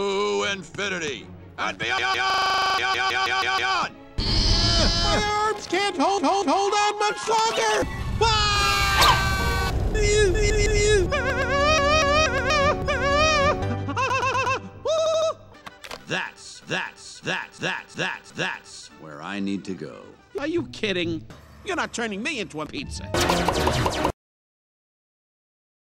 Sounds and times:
Speech: 16.1 - 23.1.

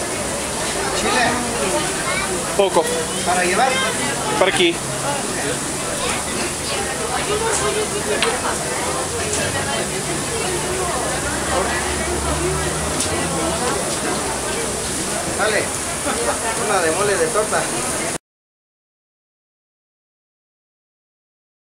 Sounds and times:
Speech: 0.0 - 18.2.

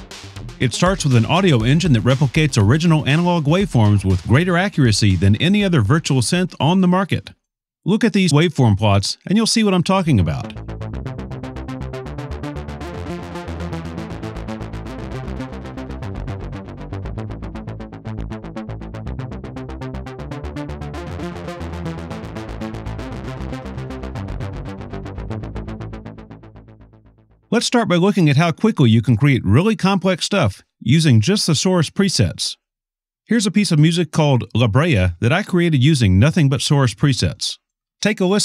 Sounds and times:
Music: 0.0 - 6.8, 9.9 - 27.6
Speech: 0.6 - 10.6, 27.5 - 32.6, 33.3 - 38.4.

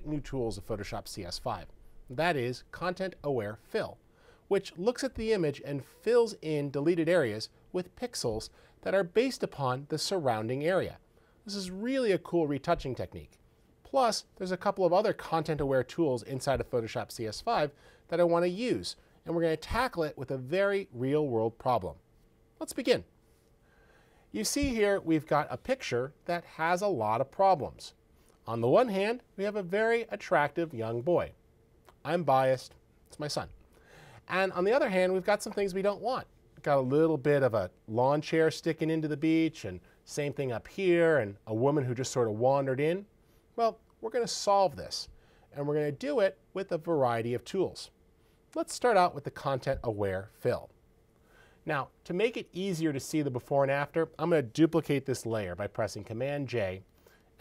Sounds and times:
Speech: 0.0 - 22.0, 22.6 - 23.1, 24.3 - 31.4, 32.0 - 33.6, 34.3 - 48.0, 48.6 - 50.8, 51.6 - 57.4.

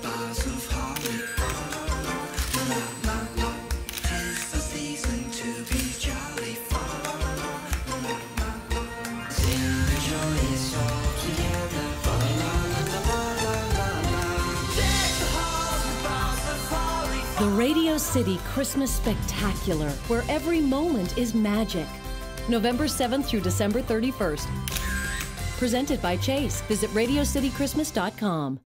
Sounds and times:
Music: 0.0 - 28.6
Speech: 17.4 - 21.9, 22.5 - 24.5, 25.6 - 28.6.

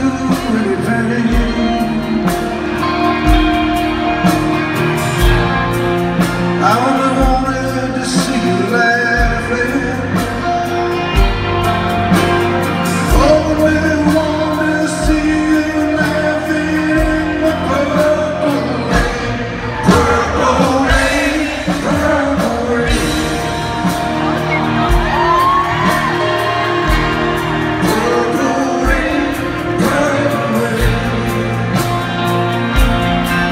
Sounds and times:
Music: 0.0 - 33.5.

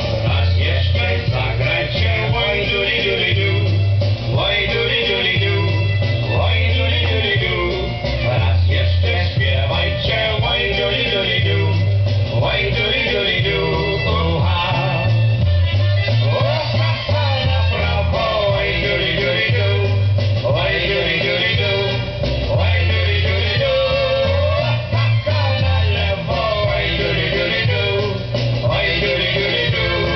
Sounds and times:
Traditional music: 0.0 - 30.1.

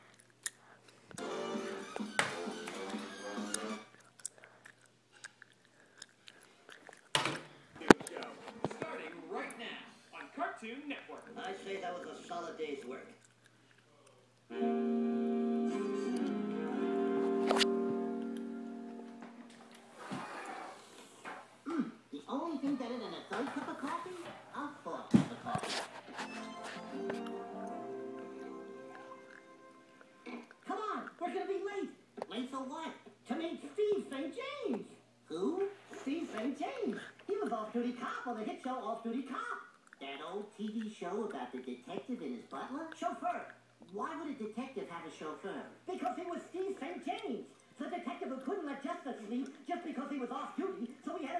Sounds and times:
Chewing, mastication: 0.0 - 1.2, 3.4 - 7.2, 11.1 - 14.5, 28.9 - 31.3, 39.6 - 44.0.

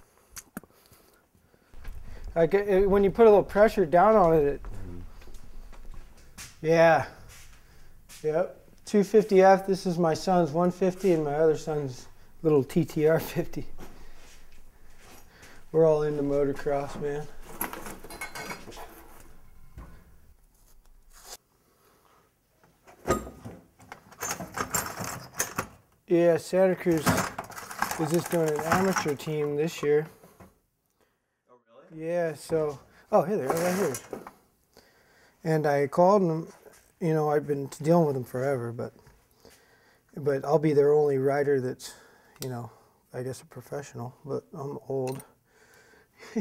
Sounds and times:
Inside, small room: 0.0 - 46.4
Speech: 2.4 - 5.1, 6.6 - 7.2, 8.2 - 13.7, 15.7 - 17.3, 26.1 - 27.3, 27.9 - 30.2, 31.5 - 34.1, 35.4 - 39.0, 40.2 - 45.3.

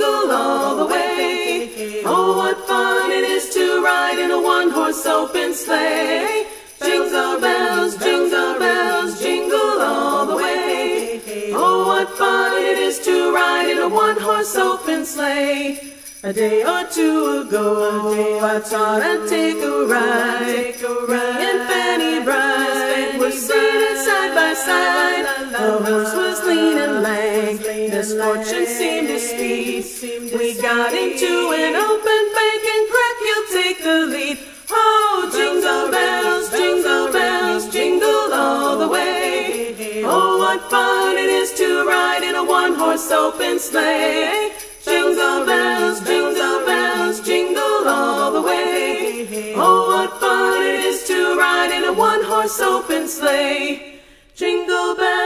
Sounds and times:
Jingle, tinkle: 0.0 - 55.2.

